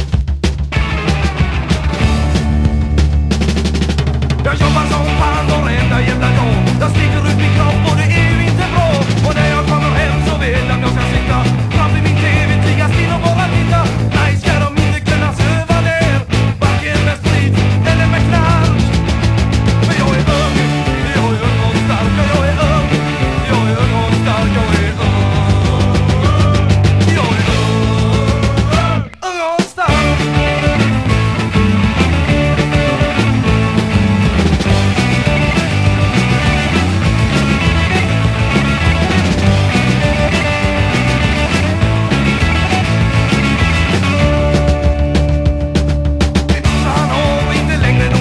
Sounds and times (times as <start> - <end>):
Music: 0.0 - 48.2.